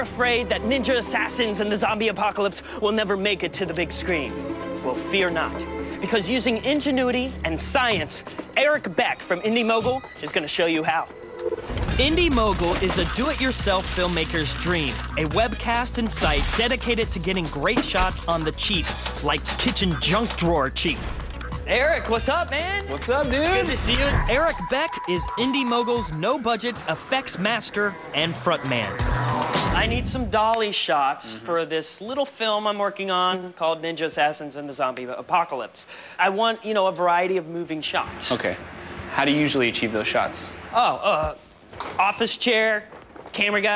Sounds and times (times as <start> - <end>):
Speech: 0.0 - 11.1, 12.0 - 21.0, 21.7 - 29.0, 29.8 - 38.6, 42.0 - 43.7
Music: 0.0 - 30.6.